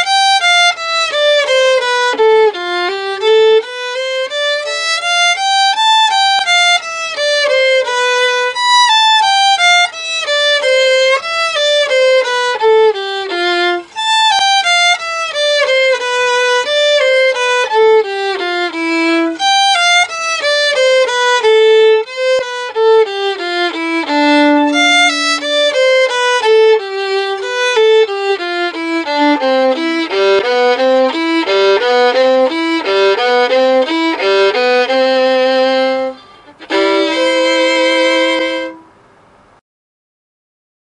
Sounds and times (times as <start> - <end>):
Violin, fiddle: 0.0 - 39.0.